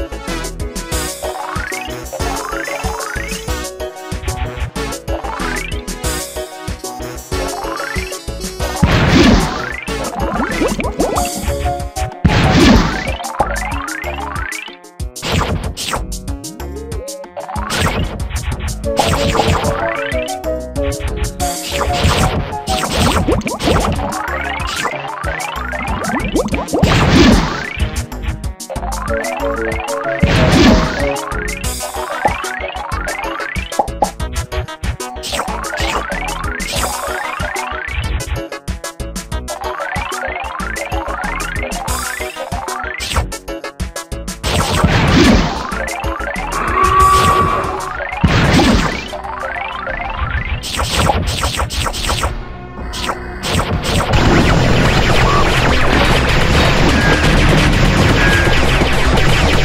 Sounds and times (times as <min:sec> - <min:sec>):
Music: 0:00.0 - 0:59.6.